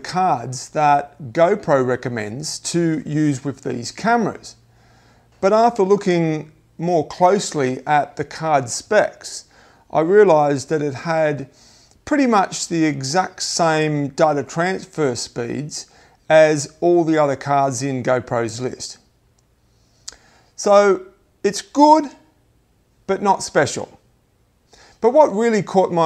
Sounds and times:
Speech: 0.0s - 4.6s, 5.4s - 19.1s, 20.6s - 22.3s, 23.1s - 24.0s, 25.0s - 26.0s.

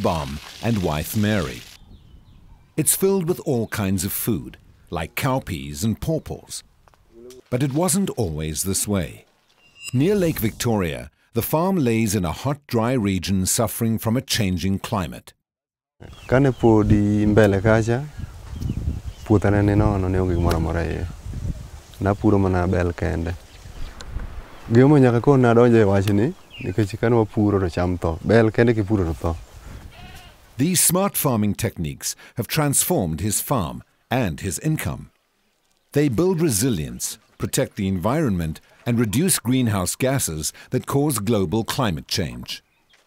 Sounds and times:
Speech: 0.0s - 1.6s, 2.8s - 6.6s, 7.2s - 9.2s, 10.0s - 15.4s, 16.3s - 18.1s, 19.3s - 21.2s, 22.0s - 23.4s, 24.7s - 29.4s, 30.6s - 35.1s, 36.0s - 42.6s.

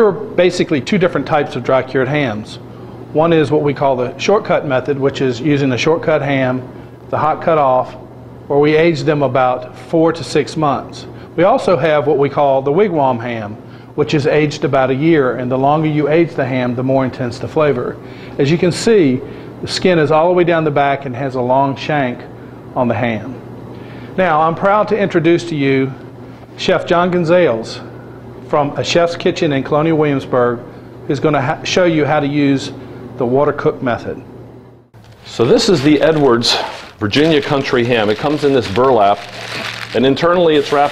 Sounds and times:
Speech: 0.0s - 23.4s, 24.2s - 26.0s, 26.6s - 27.9s, 28.5s - 34.3s, 35.3s - 40.9s.

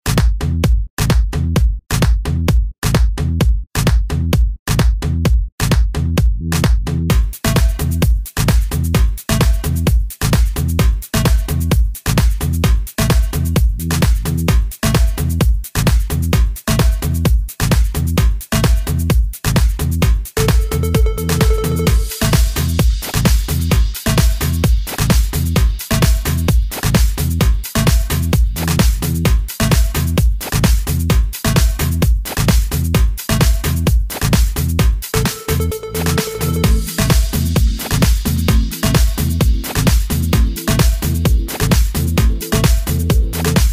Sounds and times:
Music: 0.0s - 43.7s.

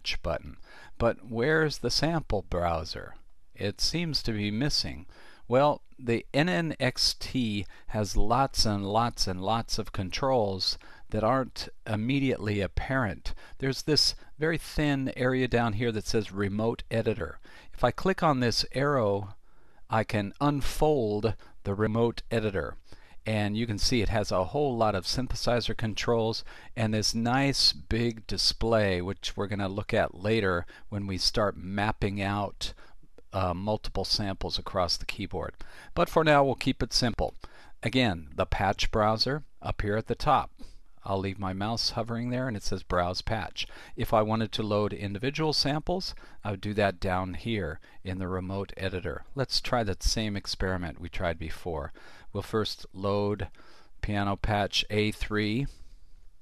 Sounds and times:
Speech: 0.0s - 55.8s.

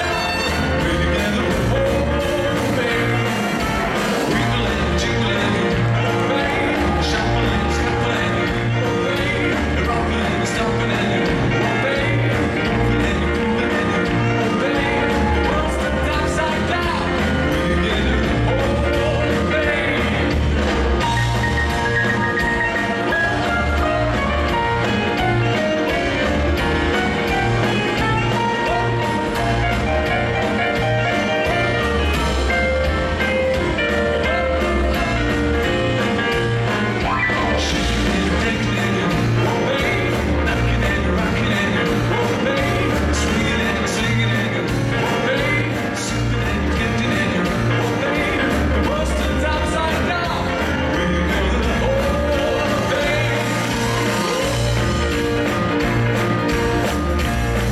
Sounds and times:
Music: 0.0s - 57.7s.

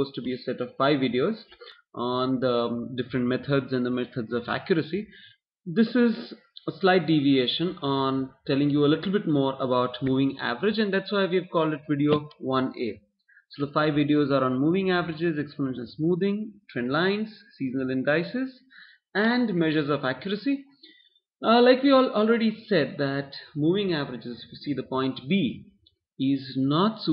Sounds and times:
Speech: 0.0s - 20.8s, 21.4s - 27.1s.

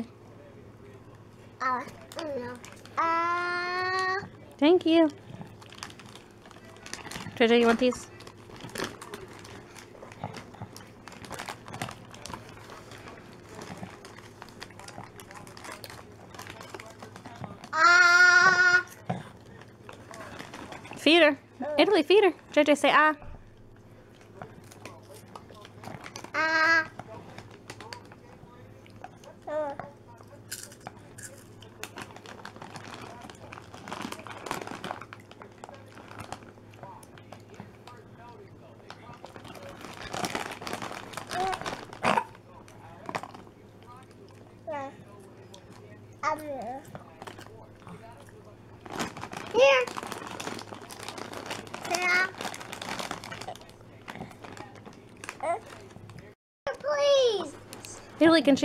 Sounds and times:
Inside, small room: 0.0s - 58.6s.

